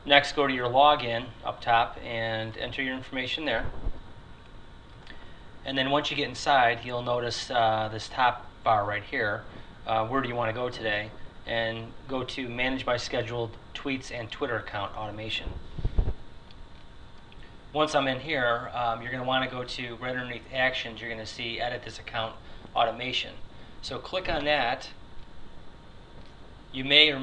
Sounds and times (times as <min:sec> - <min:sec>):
Speech: 0:00.0 - 0:03.8, 0:05.7 - 0:15.6, 0:17.8 - 0:25.0, 0:26.8 - 0:27.2.